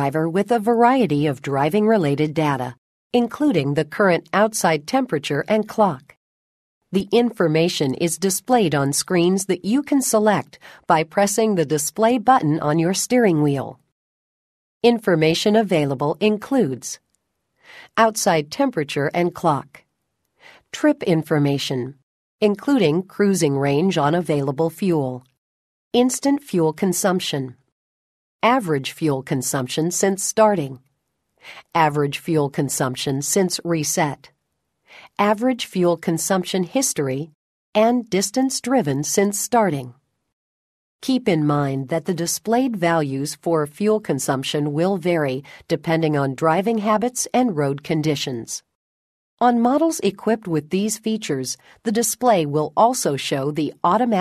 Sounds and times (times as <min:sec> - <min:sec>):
Speech synthesizer: 0:00.0 - 0:06.2, 0:07.0 - 0:13.8, 0:14.8 - 0:17.0, 0:18.0 - 0:19.8, 0:20.8 - 0:25.3, 0:26.0 - 0:27.6, 0:28.4 - 0:30.8, 0:31.6 - 0:34.3, 0:35.2 - 0:39.9, 0:41.0 - 0:48.7, 0:49.4 - 0:54.2.